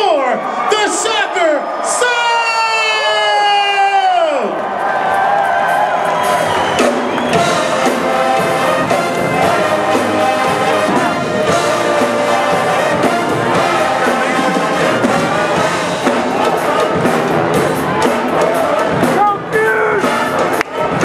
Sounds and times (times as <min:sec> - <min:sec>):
Speech: 0:00.0 - 0:04.6
Music: 0:04.8 - 0:21.0.